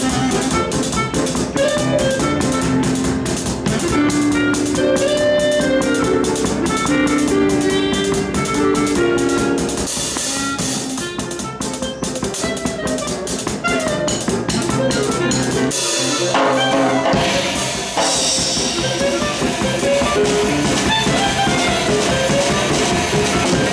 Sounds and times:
Drum: 0.0s - 23.7s
Drum kit: 0.0s - 23.7s.

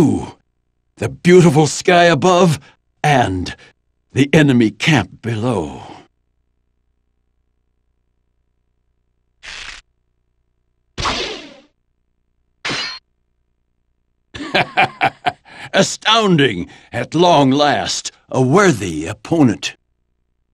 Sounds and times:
Clang: 12.7s - 13.1s.

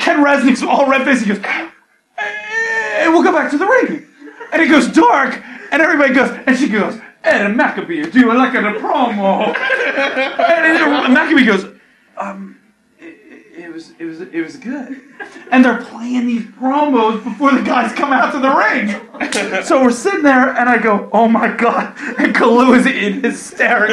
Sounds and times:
Speech: 0.0s - 9.6s, 10.4s - 23.9s
Inside, small room: 0.0s - 23.9s.

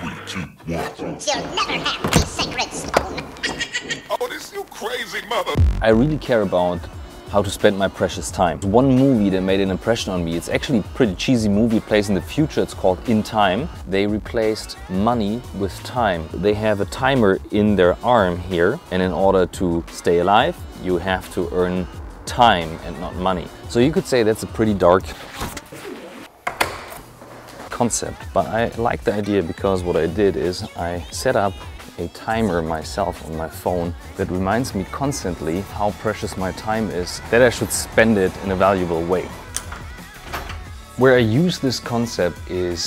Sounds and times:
Speech: 0.0s - 2.9s, 4.1s - 25.2s, 27.7s - 39.3s, 41.0s - 42.8s
Music: 1.2s - 3.5s, 4.1s - 42.8s.

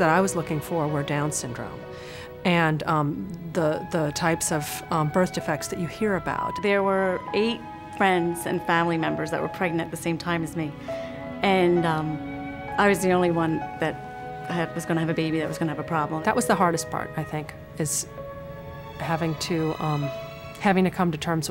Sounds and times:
Speech: 0.0s - 1.8s, 2.4s - 10.7s, 11.4s - 12.2s, 12.8s - 18.1s, 19.0s - 21.5s
Music: 0.0s - 21.5s.

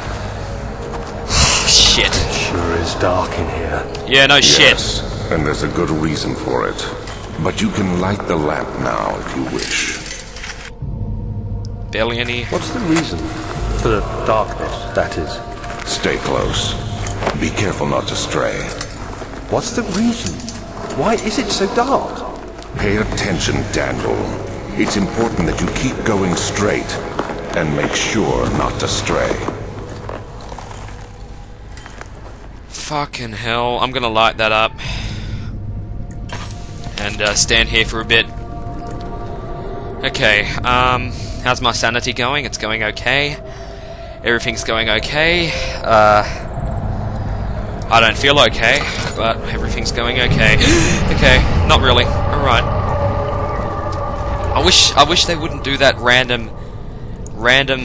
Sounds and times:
Speech: 1.4s - 10.1s, 11.9s - 16.8s, 21.0s - 29.5s, 32.7s - 34.8s, 37.0s - 38.3s, 40.0s - 43.4s, 44.2s - 46.4s, 47.9s - 52.7s, 54.5s - 56.5s, 57.4s - 57.8s.

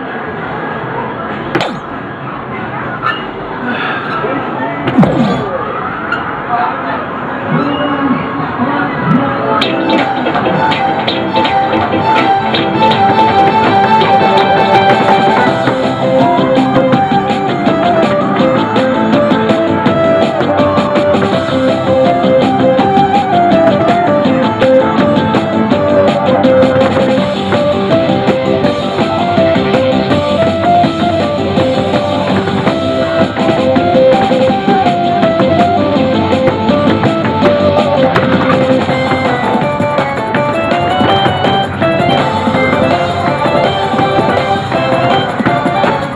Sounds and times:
Music: 8.8s - 46.1s.

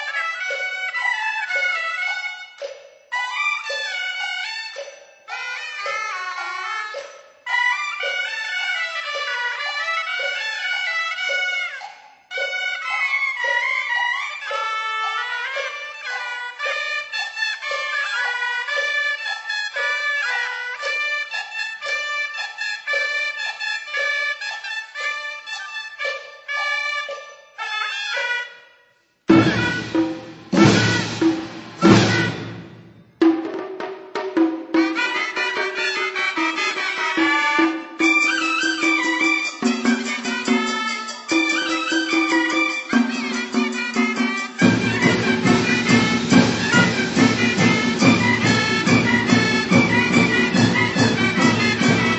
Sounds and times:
Wood block: 0.0s - 28.7s, 29.3s - 52.1s.

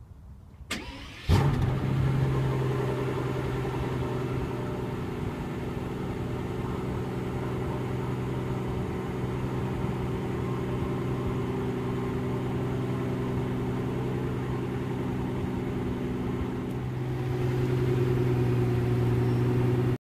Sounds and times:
Car: 0.1s - 20.0s.

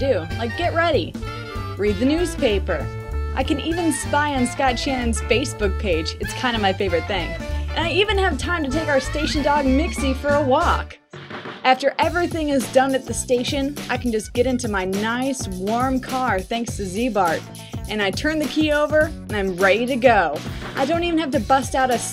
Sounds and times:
Speech: 0.0s - 1.2s, 1.8s - 11.0s, 11.7s - 22.1s
Music: 0.0s - 22.1s.

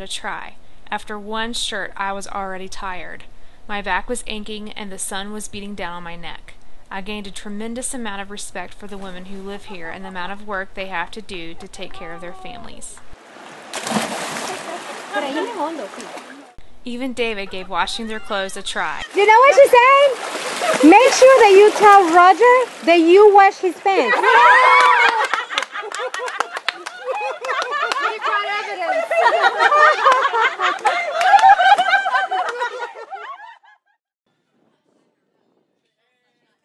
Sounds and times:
Speech: 0.0s - 13.0s, 20.8s - 24.3s
Splash, splatter: 13.2s - 16.6s, 20.0s - 23.1s.

